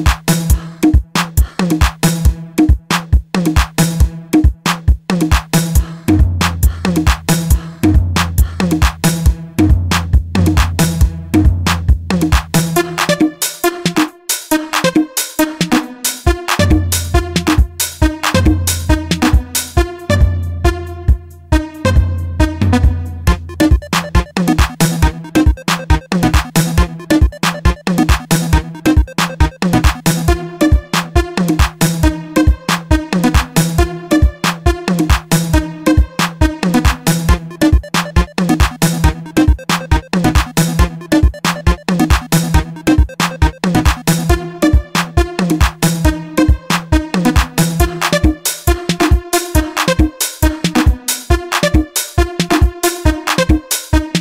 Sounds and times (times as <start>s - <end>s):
Afrobeat: 0.0s - 54.2s.